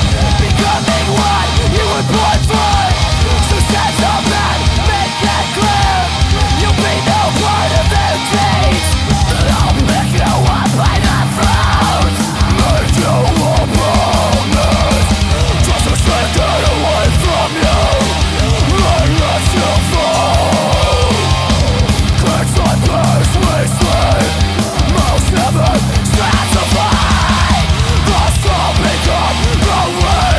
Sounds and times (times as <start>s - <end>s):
Music: 0.0s - 30.3s.